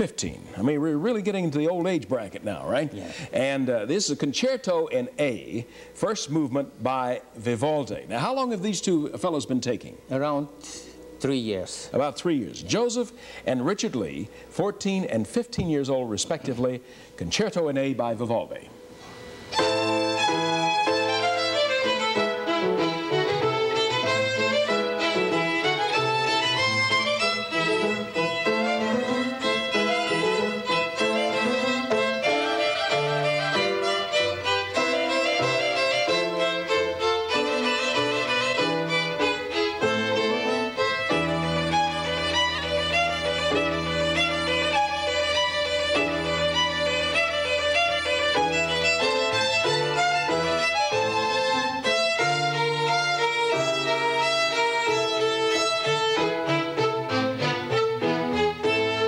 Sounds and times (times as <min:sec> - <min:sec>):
Violin, fiddle: 0:19.5 - 0:59.0.